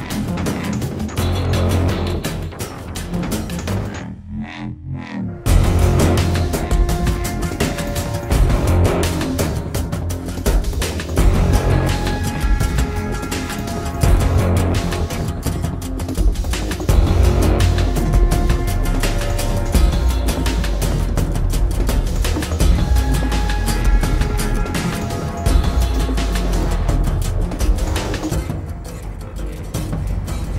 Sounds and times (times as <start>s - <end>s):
Scary music: 0.0s - 30.5s.